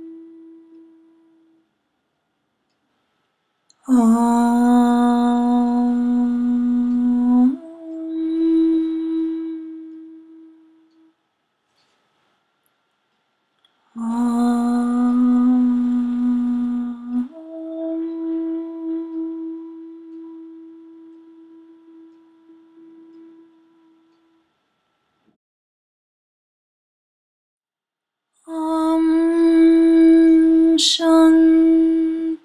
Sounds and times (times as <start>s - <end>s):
Mantra: 0.0s - 1.6s, 3.8s - 11.1s, 14.0s - 24.2s, 28.5s - 32.4s.